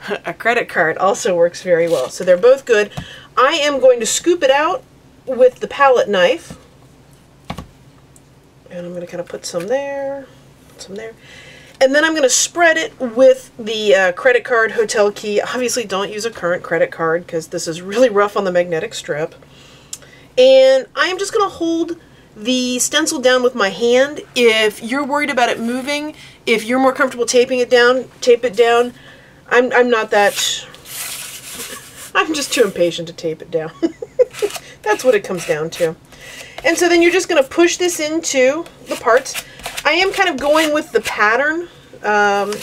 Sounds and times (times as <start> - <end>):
Speech: 0.0 - 6.6, 8.7 - 11.2, 11.8 - 19.4, 20.4 - 30.7, 32.1 - 33.9, 34.8 - 36.0, 36.6 - 42.6.